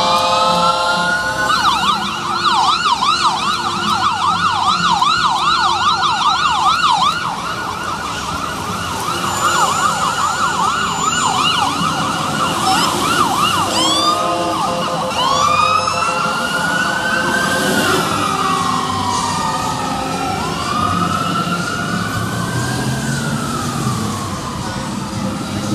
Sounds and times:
Fire engine, fire truck (siren): 0.0s - 25.7s
Police car (siren): 0.0s - 25.7s.

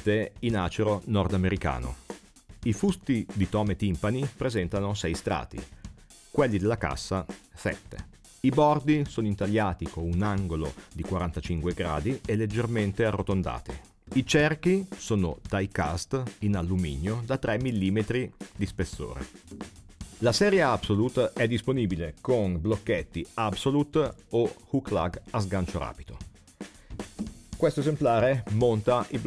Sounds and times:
Speech: 0.0s - 2.0s, 2.6s - 5.7s, 6.3s - 19.3s, 20.2s - 26.2s, 27.6s - 29.2s
Music: 0.0s - 29.2s.

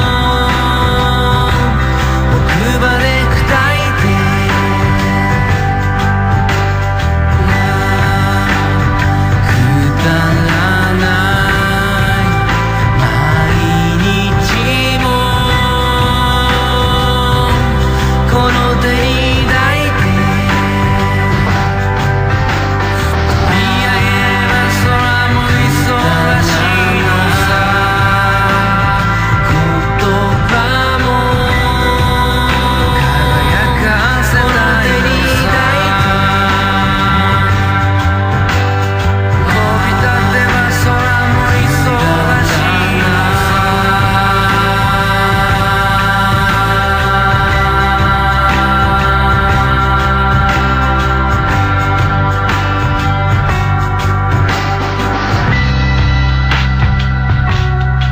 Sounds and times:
Independent music: 0.0s - 58.1s.

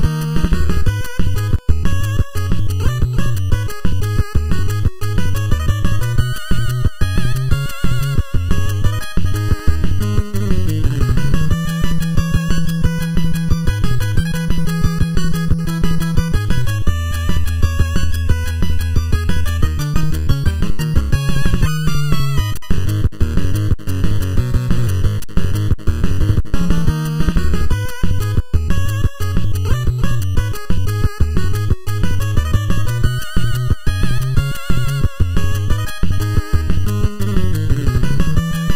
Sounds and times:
Video game music: 0.0s - 38.7s.

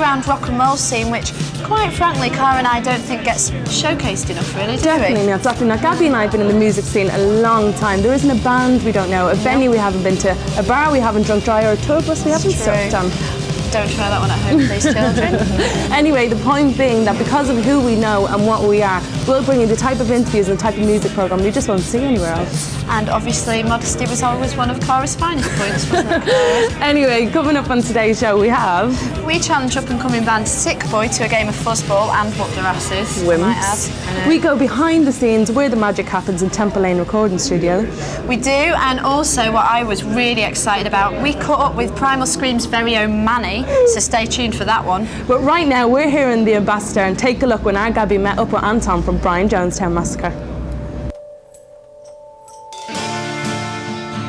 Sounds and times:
Music: 0.0s - 54.2s.

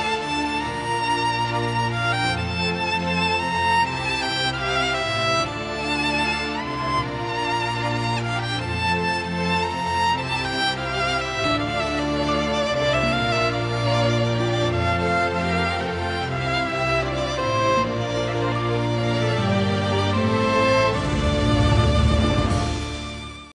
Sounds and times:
Music: 0.0s - 23.5s.

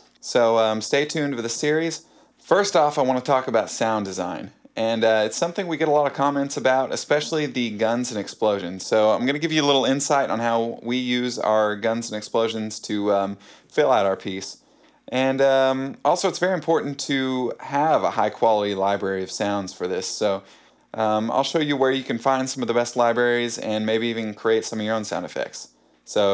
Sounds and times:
Speech: 0.0s - 26.3s.

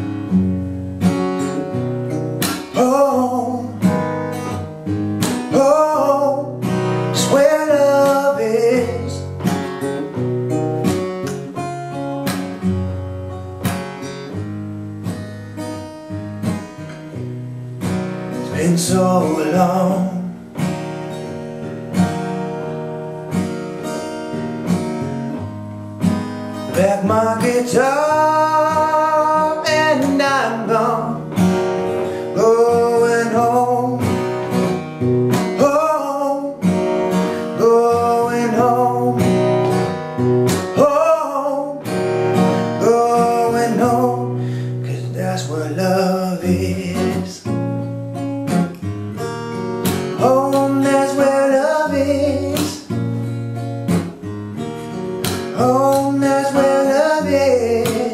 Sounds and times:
Strum: 0.0s - 58.1s.

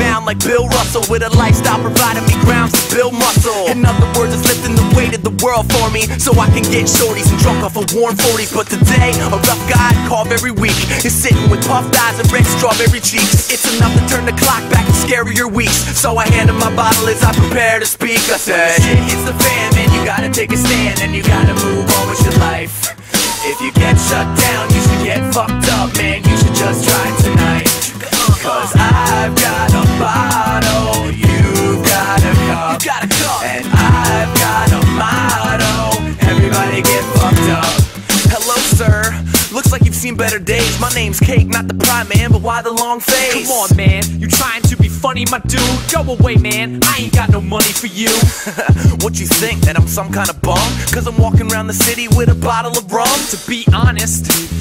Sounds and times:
Hip hop music: 0.0s - 54.6s.

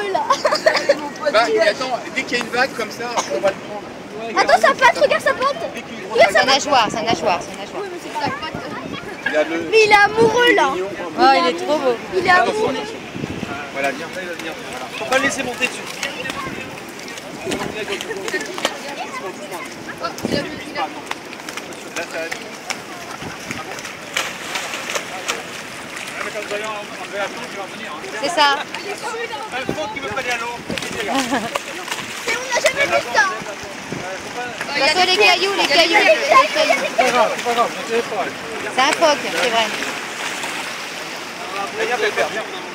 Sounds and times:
Outside, rural or natural: 0.0s - 42.7s.

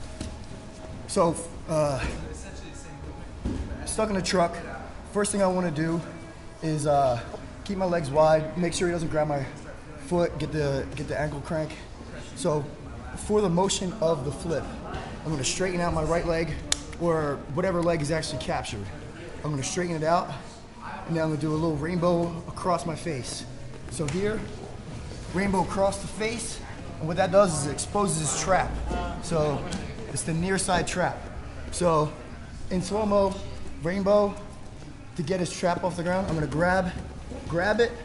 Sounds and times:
Speech: 1.1s - 3.2s, 3.8s - 24.6s, 25.3s - 34.5s, 35.2s - 38.0s.

